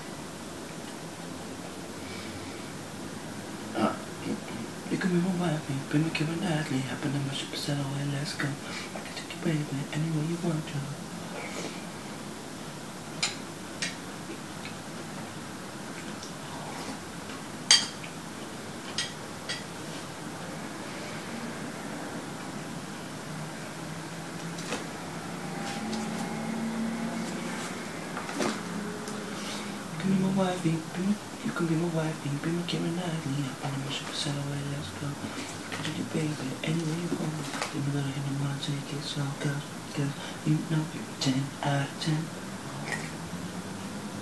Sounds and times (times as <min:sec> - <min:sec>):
Male singing: 0:03.8 - 0:08.6, 0:09.2 - 0:11.0, 0:29.9 - 0:43.1.